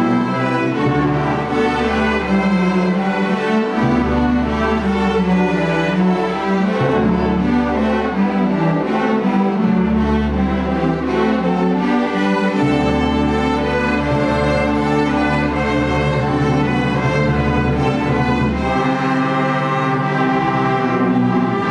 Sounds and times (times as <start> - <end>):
Orchestra: 0.0 - 21.7.